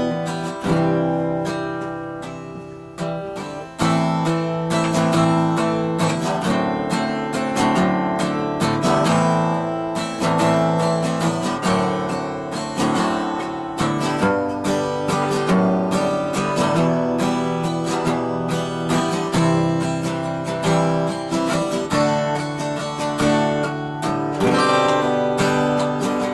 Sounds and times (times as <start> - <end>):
Acoustic guitar: 0.0 - 26.3.